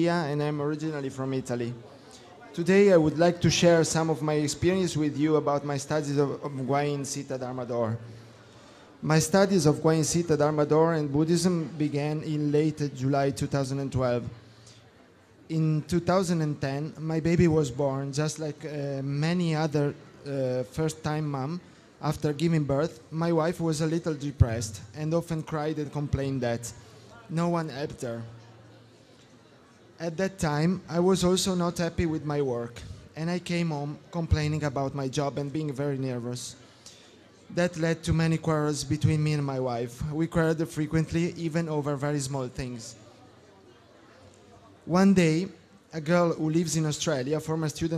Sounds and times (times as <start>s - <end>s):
Speech: 0.0s - 8.1s, 9.0s - 14.4s, 15.5s - 28.7s, 30.0s - 36.6s, 37.5s - 47.9s.